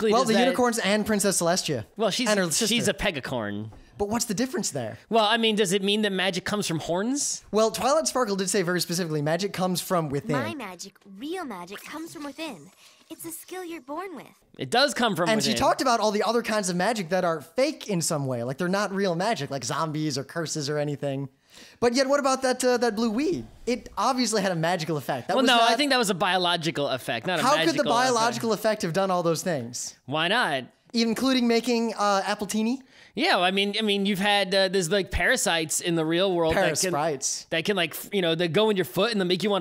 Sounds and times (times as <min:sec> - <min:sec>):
Speech: 0:00.0 - 0:10.6, 0:14.6 - 0:39.6.